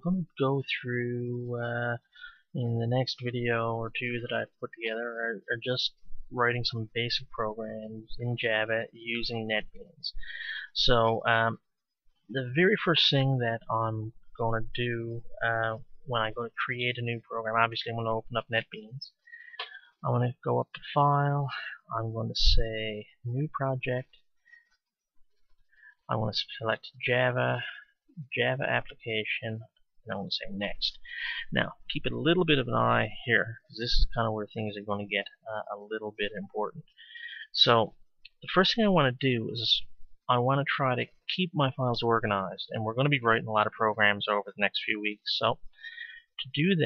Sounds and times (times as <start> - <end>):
Speech: 0.0 - 11.6, 12.3 - 19.2, 20.0 - 24.2, 26.1 - 46.8.